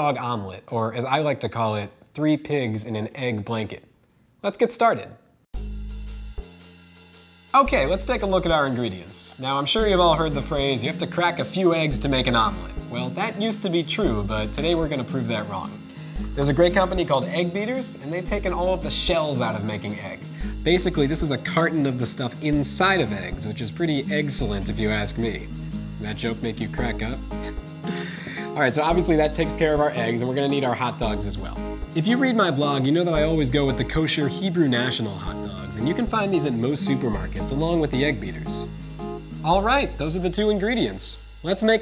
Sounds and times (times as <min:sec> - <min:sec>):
Speech: 0:00.0 - 0:05.2, 0:07.6 - 0:27.3, 0:28.4 - 0:38.7, 0:39.4 - 0:41.8
Music: 0:05.5 - 0:41.8.